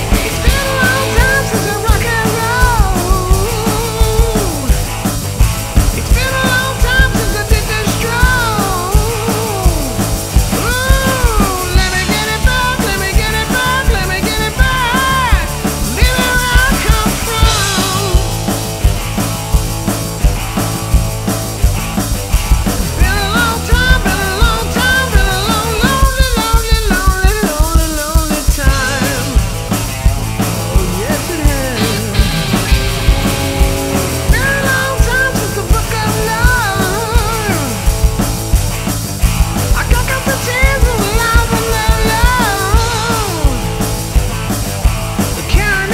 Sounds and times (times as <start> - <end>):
Rock and roll: 0.0 - 45.9.